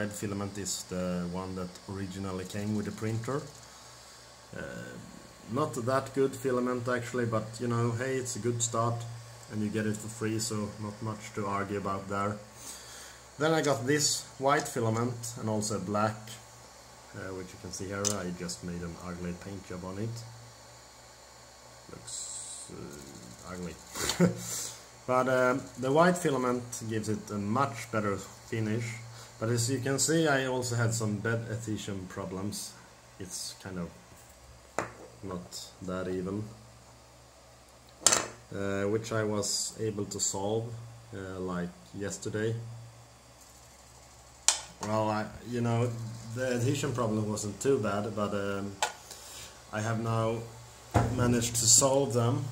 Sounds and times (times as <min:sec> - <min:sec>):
Speech: 0:00.0 - 0:03.6, 0:04.5 - 0:12.5, 0:13.4 - 0:16.4, 0:17.1 - 0:20.3, 0:21.9 - 0:24.4, 0:25.1 - 0:34.0, 0:35.2 - 0:36.6, 0:38.5 - 0:42.8, 0:44.8 - 0:48.9, 0:49.7 - 0:52.5.